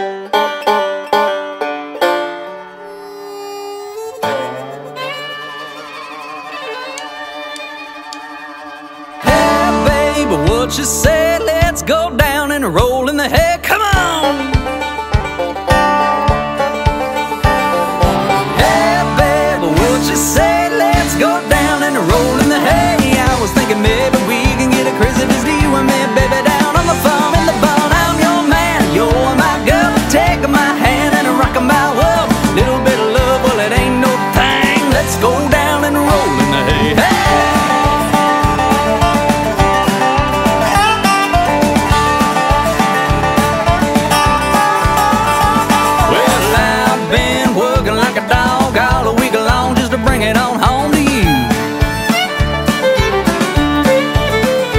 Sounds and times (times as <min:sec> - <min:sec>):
Bluegrass: 0:00.0 - 0:54.7.